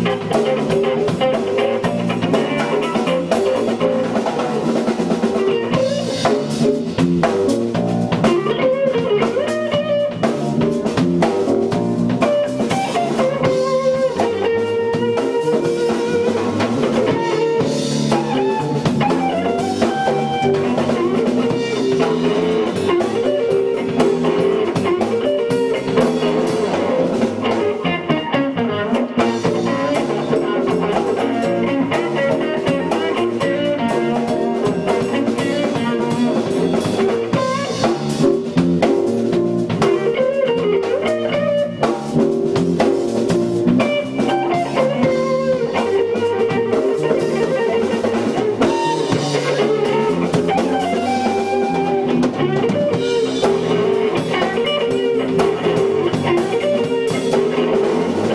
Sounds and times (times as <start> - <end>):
Music: 0.0 - 58.3.